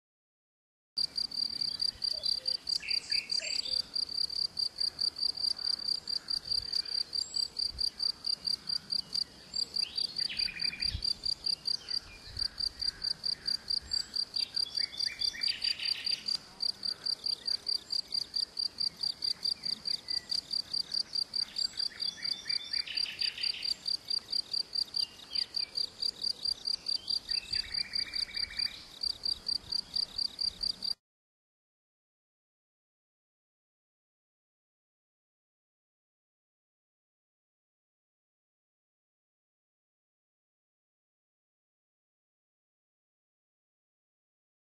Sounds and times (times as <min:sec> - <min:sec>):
Cricket: 0:01.0 - 0:31.0
Chirp, tweet: 0:01.4 - 0:04.0, 0:04.8 - 0:16.4, 0:17.0 - 0:30.8.